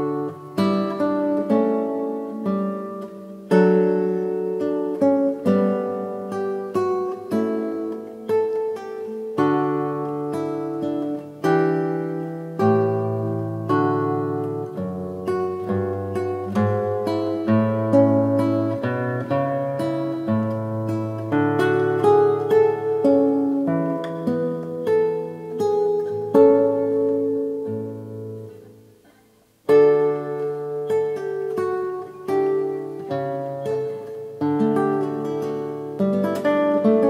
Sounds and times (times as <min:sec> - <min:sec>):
Acoustic guitar: 0:00.0 - 0:37.1.